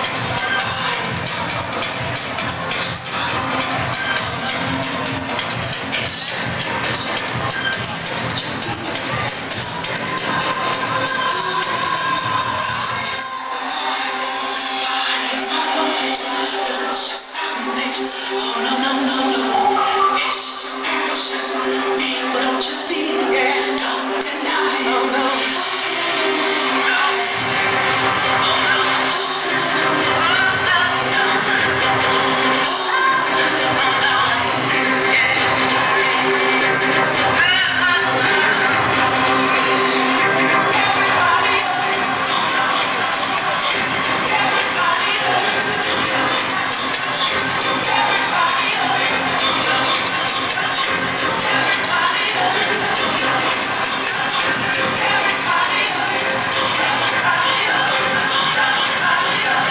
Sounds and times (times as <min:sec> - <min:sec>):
House music: 0:00.0 - 0:59.7.